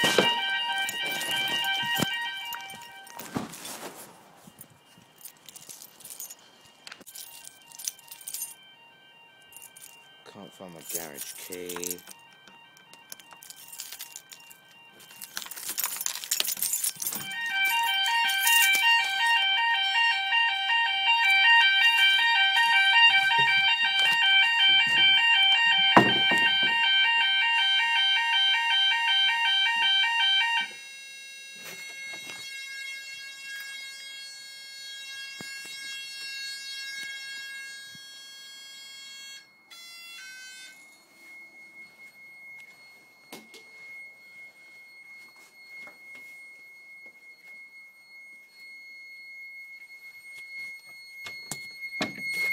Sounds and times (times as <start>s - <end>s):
Speech: 10.3s - 12.0s.